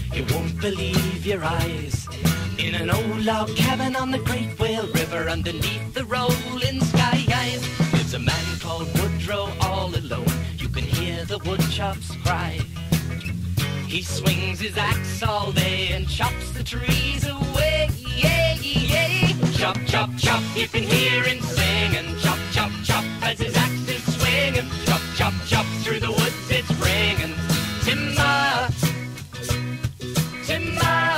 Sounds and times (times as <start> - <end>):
Music: 0.0 - 31.1.